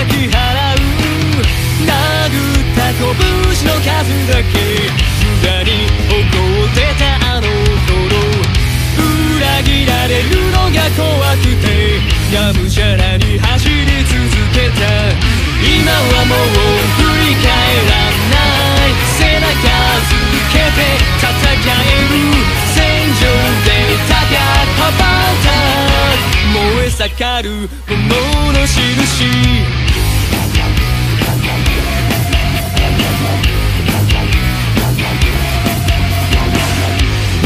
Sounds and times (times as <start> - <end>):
Music: 0.0 - 37.4.